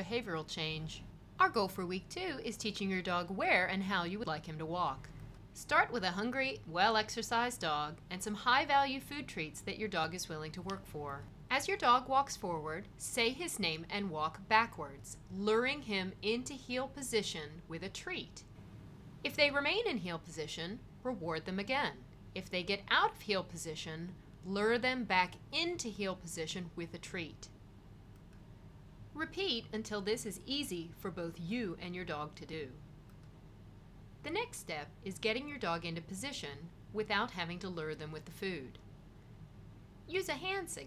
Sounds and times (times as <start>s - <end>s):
Speech: 0.0s - 18.5s, 19.3s - 27.6s, 29.2s - 32.8s, 34.2s - 38.8s, 40.1s - 40.8s.